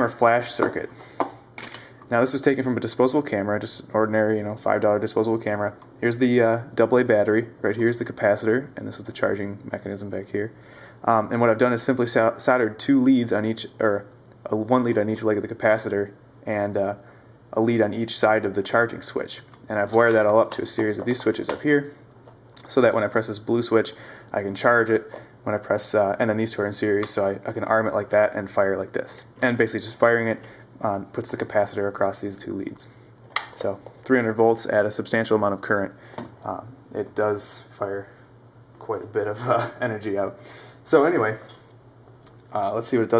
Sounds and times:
Speech: 0.0s - 1.0s, 2.1s - 22.0s, 22.6s - 33.0s, 33.6s - 38.2s, 38.8s - 41.6s, 42.5s - 43.1s.

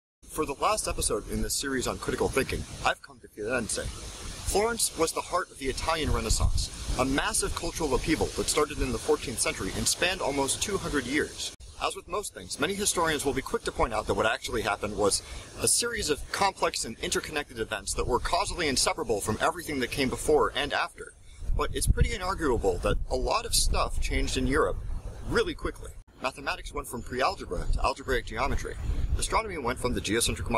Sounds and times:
Speech: 0.3s - 30.5s.

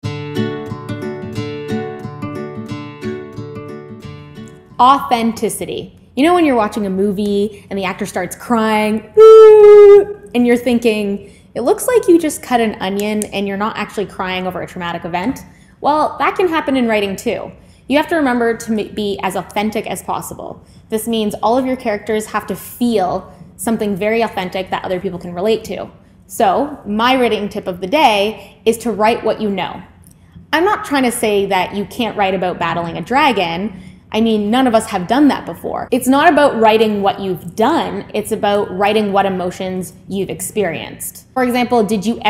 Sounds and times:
Speech: 4.8s - 29.9s, 30.6s - 42.3s.

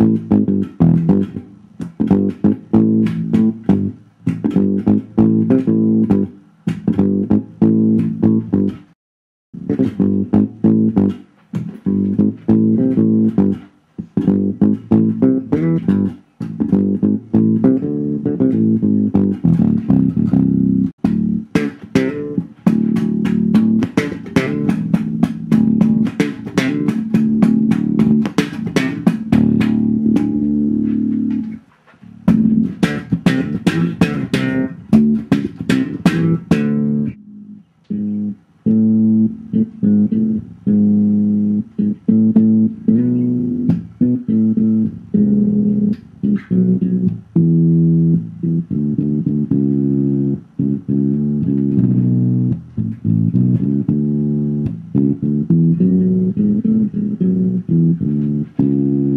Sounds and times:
Bass guitar: 0.0s - 9.0s, 9.6s - 59.1s
Strum: 0.0s - 9.0s, 9.6s - 59.1s.

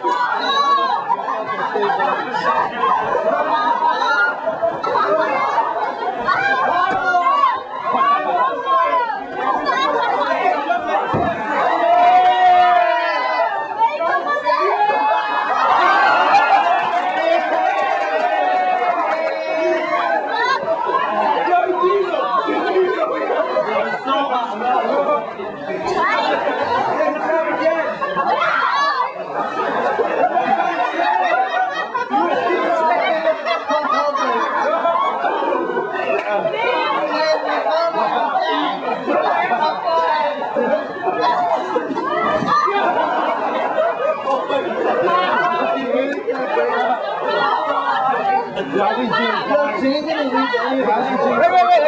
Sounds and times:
Speech: 0.0s - 51.8s.

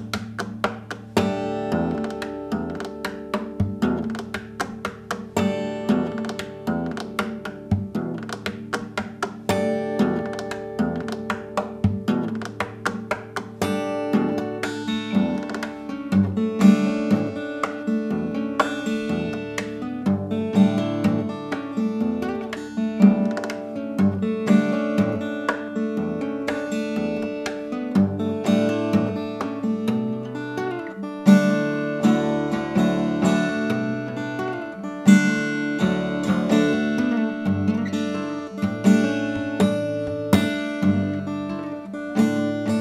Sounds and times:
Strum: 0.0s - 42.8s.

